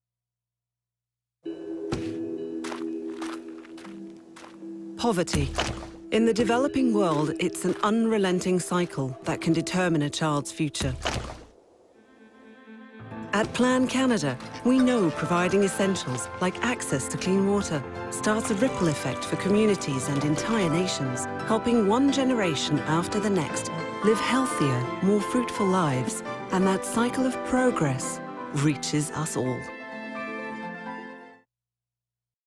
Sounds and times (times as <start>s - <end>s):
Music: 1.4s - 10.8s, 11.9s - 31.5s
Speech: 5.0s - 11.1s, 13.3s - 29.7s.